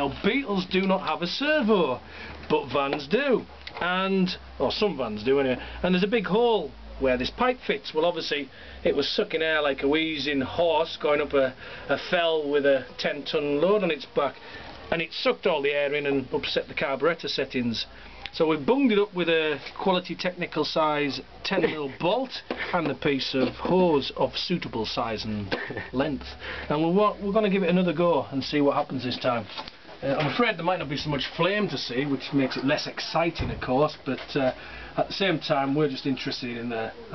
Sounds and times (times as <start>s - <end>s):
Speech: 0.0s - 37.1s.